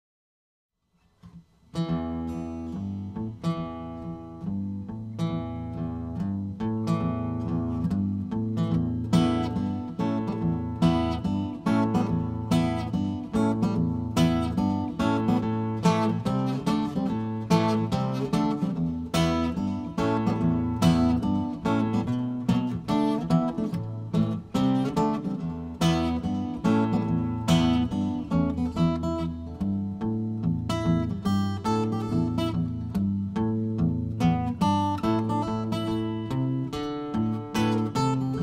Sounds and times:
Acoustic guitar: 0:00.8 - 0:38.4
Strum: 0:01.0 - 0:38.4.

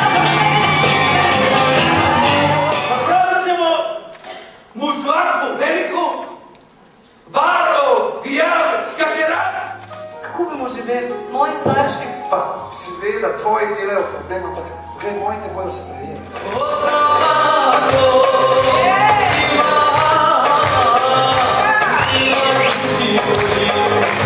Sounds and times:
Music: 0:00.0 - 0:03.2, 0:08.3 - 0:24.2.

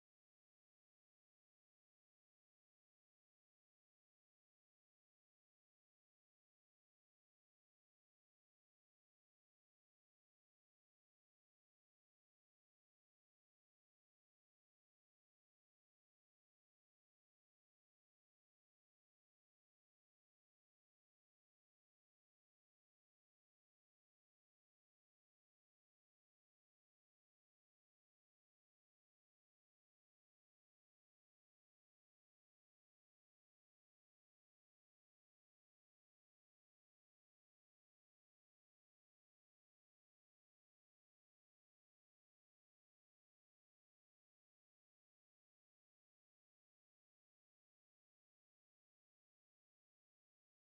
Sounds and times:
Silence: 0:00.0 - 0:50.7.

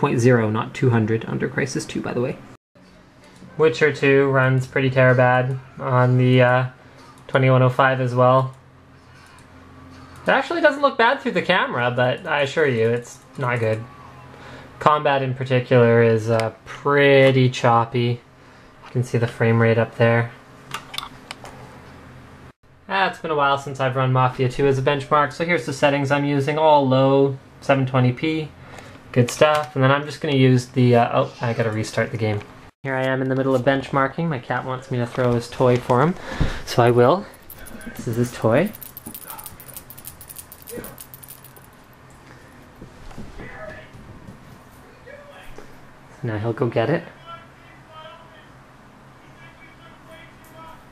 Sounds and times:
Speech: 0:00.0 - 0:02.5, 0:03.5 - 0:08.6, 0:10.2 - 0:13.9, 0:14.8 - 0:18.2, 0:18.9 - 0:20.4, 0:22.9 - 0:39.4, 0:43.4 - 0:44.0, 0:44.9 - 0:48.6, 0:49.2 - 0:50.9
Inside, small room: 0:00.0 - 0:50.9.

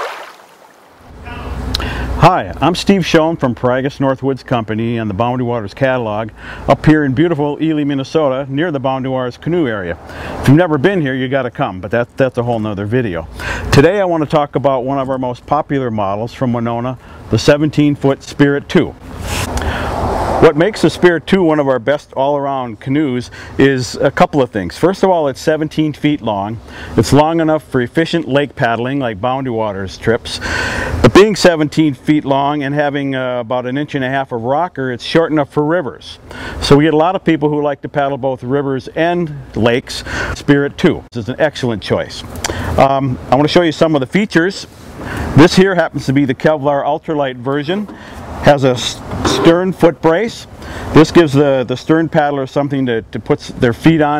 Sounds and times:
Speech: 0:01.3 - 0:01.6, 0:02.2 - 0:19.0, 0:20.4 - 0:30.4, 0:31.0 - 0:44.7, 0:45.4 - 0:54.1.

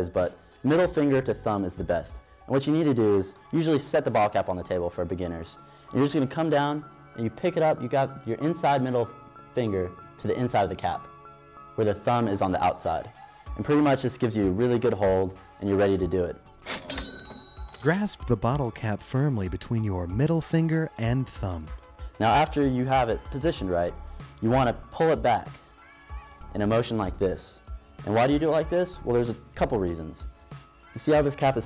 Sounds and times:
Speech: 0:00.0 - 0:11.1, 0:11.8 - 0:16.4, 0:17.8 - 0:25.6, 0:26.6 - 0:30.2, 0:31.0 - 0:31.6
Inside, small room: 0:00.0 - 0:31.6
Music: 0:00.0 - 0:31.6.

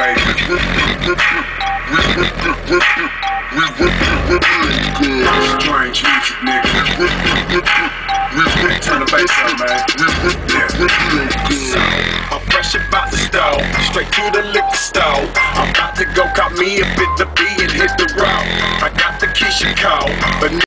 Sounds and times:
Music: 0:00.0 - 0:20.6.

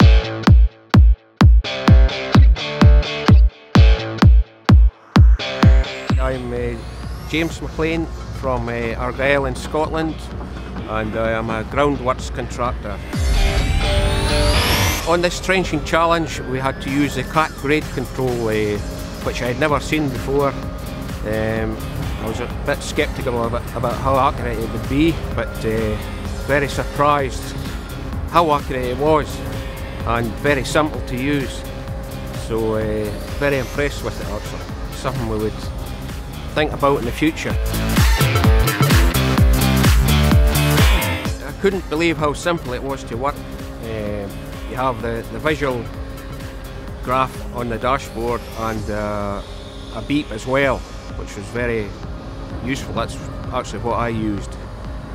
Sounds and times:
Music: 0:00.0 - 0:55.1
Speech: 0:06.1 - 0:13.1, 0:15.0 - 0:20.6, 0:21.2 - 0:27.6, 0:28.3 - 0:29.4, 0:30.0 - 0:31.6, 0:32.4 - 0:35.7, 0:36.5 - 0:37.6, 0:41.4 - 0:45.9, 0:47.0 - 0:52.0, 0:52.6 - 0:54.6.

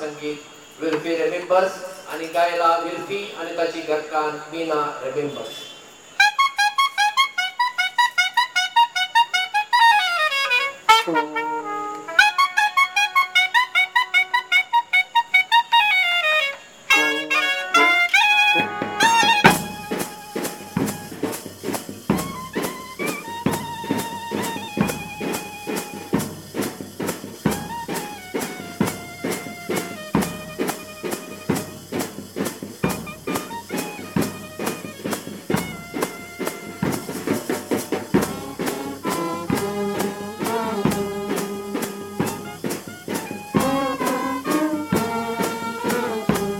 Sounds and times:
Speech: 0:00.0 - 0:05.8
Brass instrument: 0:06.2 - 0:46.6.

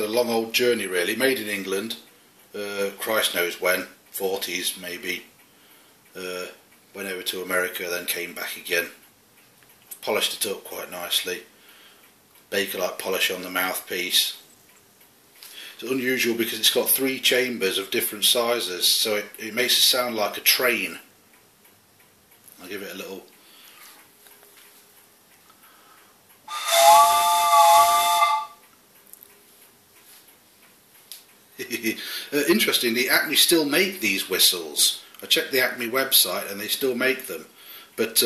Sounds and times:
Speech: 0:00.0 - 0:05.3, 0:06.2 - 0:09.0, 0:10.0 - 0:11.5, 0:12.5 - 0:14.4, 0:15.8 - 0:21.1, 0:22.6 - 0:23.3, 0:31.6 - 0:38.2
Whistle: 0:26.5 - 0:28.6.

